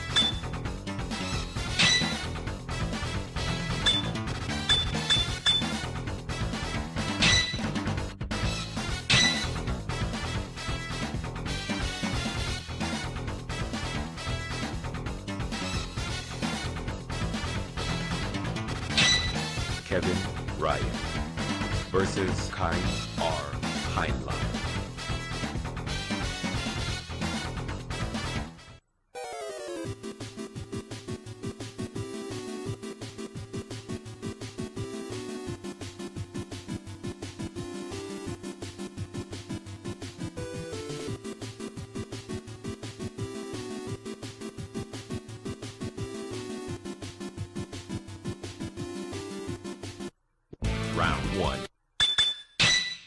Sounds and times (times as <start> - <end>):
Music: 0.0 - 51.7
Speech: 19.9 - 20.9, 21.9 - 24.5, 50.9 - 51.7.